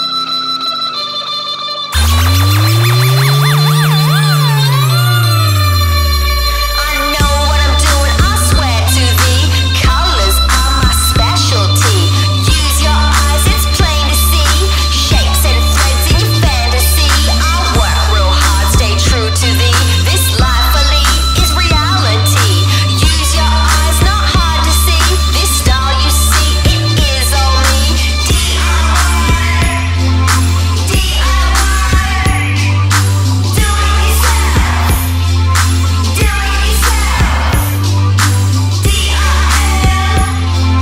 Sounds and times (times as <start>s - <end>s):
Music: 0.0s - 40.8s.